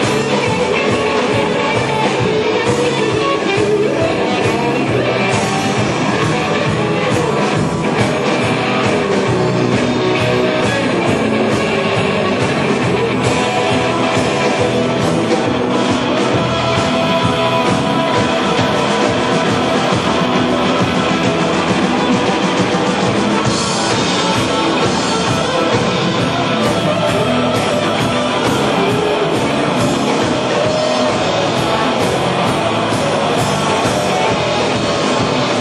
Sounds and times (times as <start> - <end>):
Guitar: 0.0 - 35.6
Rock and roll: 0.0 - 35.6.